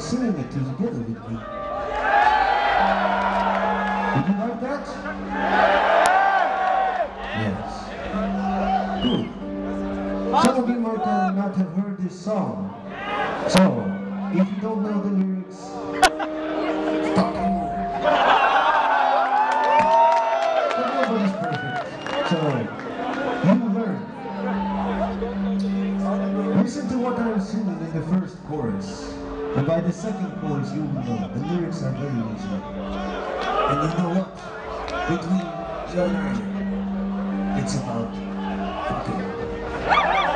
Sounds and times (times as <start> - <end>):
Speech: 0.0 - 1.5, 4.1 - 5.0, 7.4 - 7.9, 10.3 - 12.8, 13.5 - 15.8, 20.8 - 22.7, 26.0 - 32.7, 33.7 - 34.4, 35.1 - 36.6, 37.6 - 38.2, 38.8 - 39.4
Music: 0.0 - 40.3.